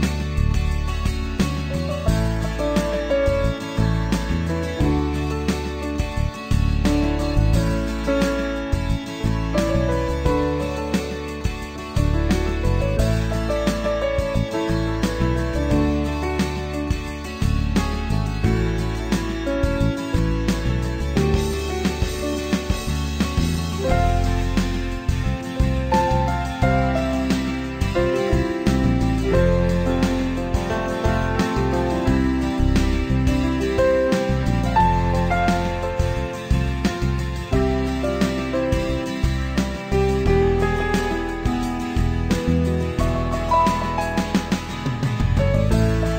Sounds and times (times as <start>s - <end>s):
Music: 0.0s - 46.1s.